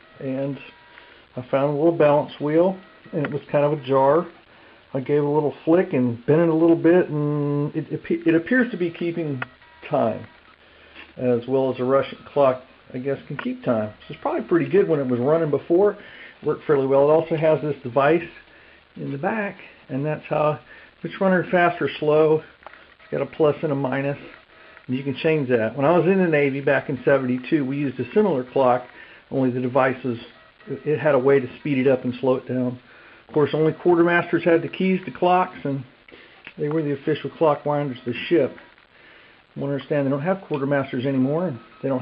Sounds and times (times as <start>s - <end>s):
Speech: 0.2s - 0.8s, 1.4s - 10.3s, 11.2s - 18.4s, 19.0s - 22.5s, 23.1s - 35.9s, 36.5s - 38.6s, 39.6s - 42.0s.